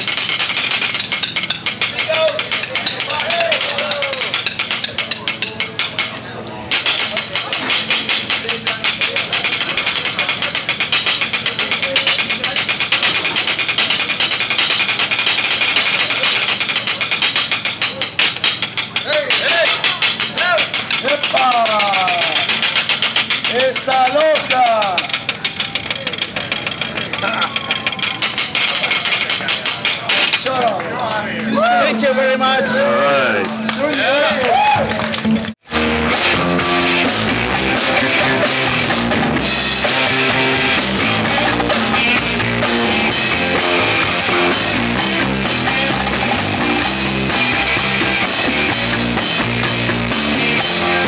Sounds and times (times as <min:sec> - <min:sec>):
Music: 0:00.0 - 0:30.4, 0:31.2 - 0:51.0
Speech: 0:02.0 - 0:07.6, 0:19.0 - 0:22.5, 0:23.5 - 0:25.1, 0:27.2 - 0:34.5.